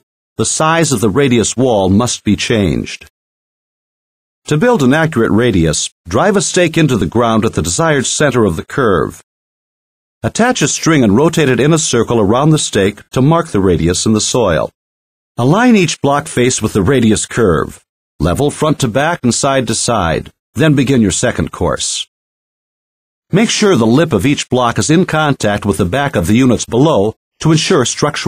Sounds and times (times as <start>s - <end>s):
Speech: 0.0s - 3.1s, 4.5s - 9.3s, 10.2s - 14.8s, 15.4s - 22.1s, 23.3s - 28.2s.